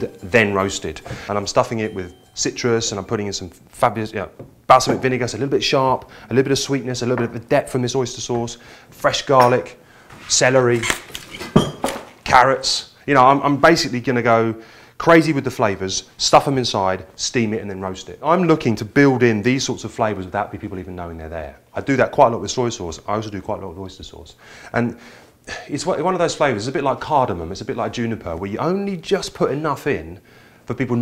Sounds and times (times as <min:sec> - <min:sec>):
Speech: 0:00.0 - 0:11.0, 0:12.2 - 0:31.0.